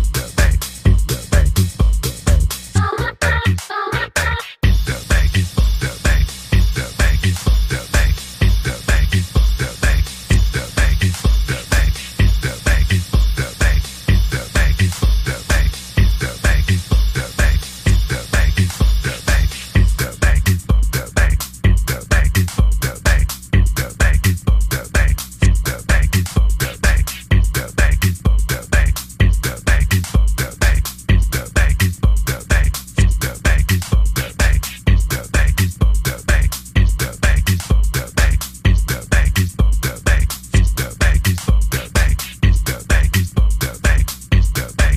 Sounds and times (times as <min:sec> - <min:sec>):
Music: 0:00.0 - 0:44.9.